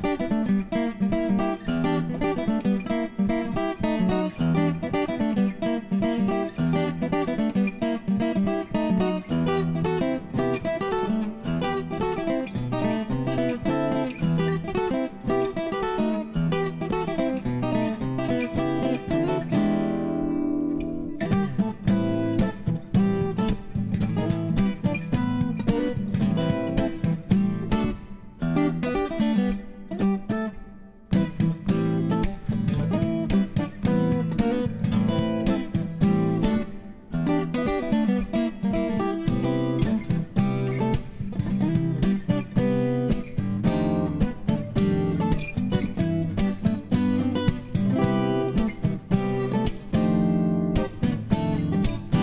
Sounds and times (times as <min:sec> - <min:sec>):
Guitar: 0:00.0 - 0:52.2.